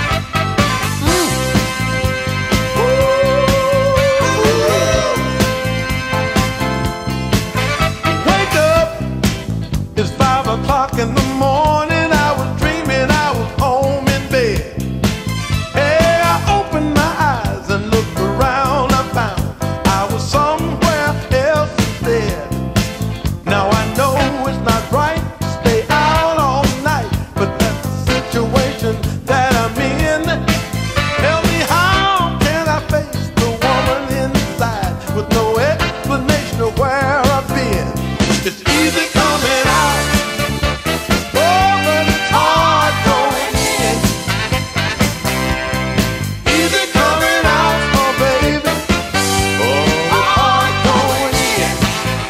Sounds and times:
Music: 0:00.0 - 0:52.2.

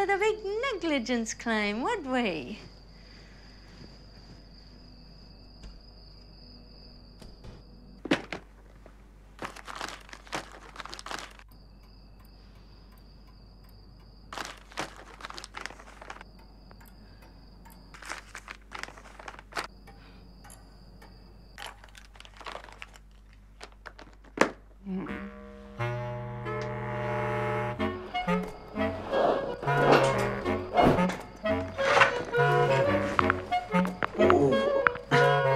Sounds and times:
Crumpling, crinkling: 0:08.1 - 0:11.5, 0:14.3 - 0:16.2, 0:18.0 - 0:19.7, 0:21.6 - 0:24.6.

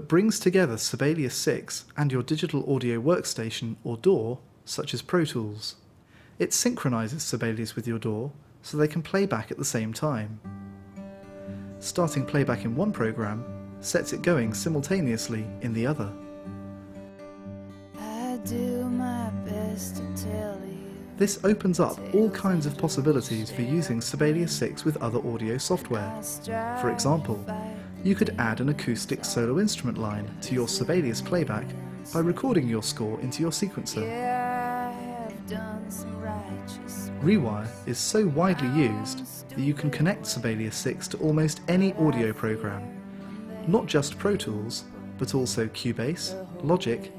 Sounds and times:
Speech: 0:00.0 - 0:05.8, 0:06.4 - 0:10.4, 0:11.8 - 0:16.2, 0:21.2 - 0:34.3, 0:36.2 - 0:43.0, 0:43.6 - 0:47.1
Music: 0:09.2 - 0:47.1.

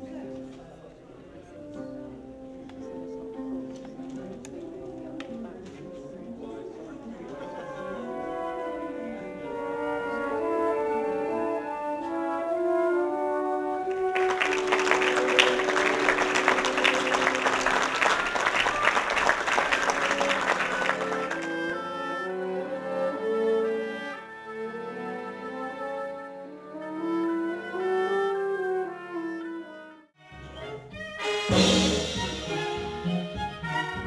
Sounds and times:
Classical music: 0:00.0 - 0:34.0.

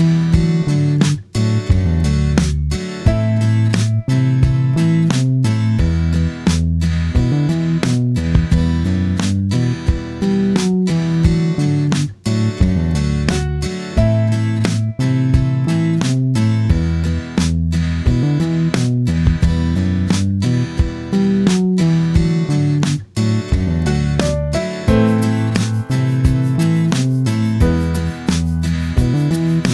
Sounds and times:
Music: 0:00.0 - 0:29.7.

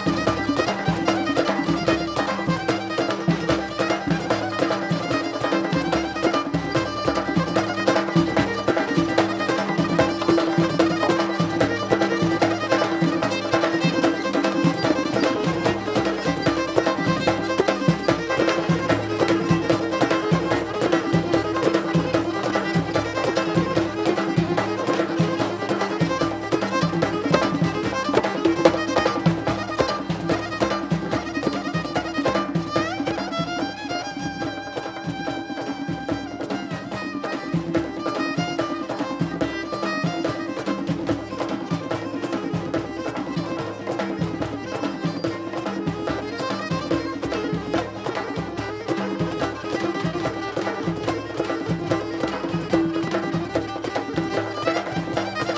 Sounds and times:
Music: 0:00.0 - 0:55.5.

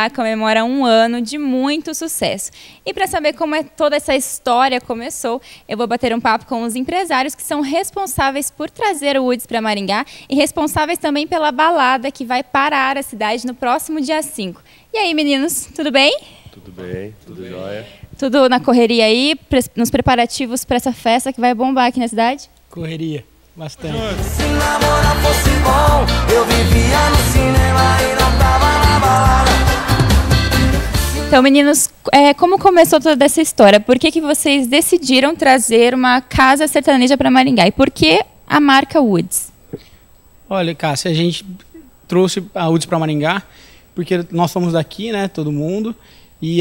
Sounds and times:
Music: 0:23.8 - 0:31.4.

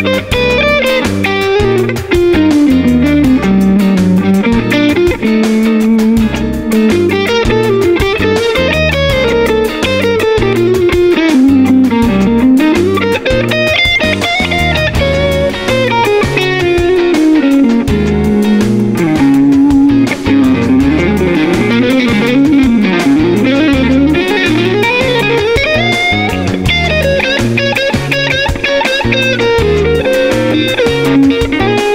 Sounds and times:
Electric guitar: 0:00.0 - 0:31.9.

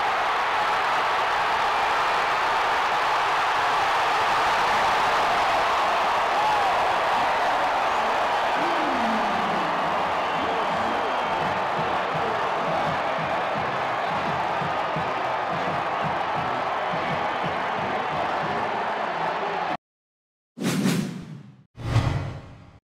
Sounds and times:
Music: 0:11.4 - 0:19.3.

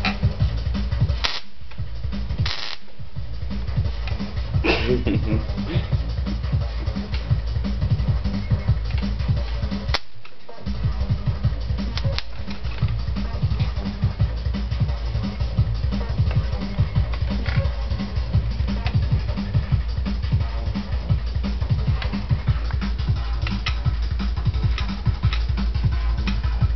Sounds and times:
Music: 0:00.0 - 0:26.7.

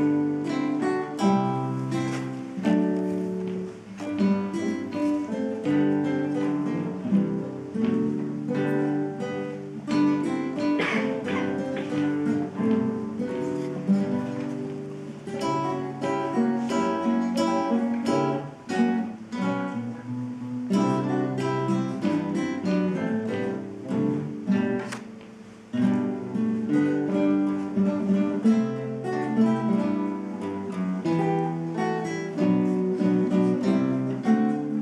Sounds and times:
Acoustic guitar: 0:00.0 - 0:34.8
Strum: 0:00.0 - 0:34.8.

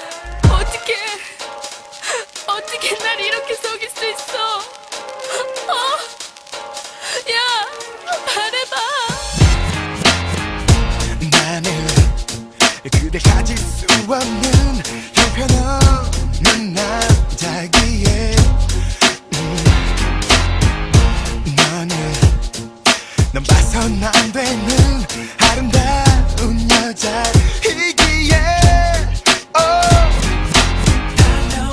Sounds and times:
Music: 0:00.0 - 0:31.7.

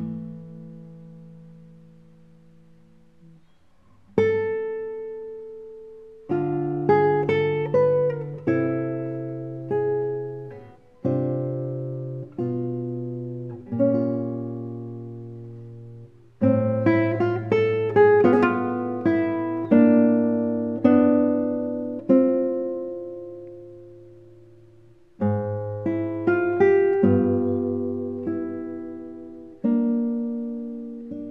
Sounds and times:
Acoustic guitar: 0:00.0 - 0:31.3.

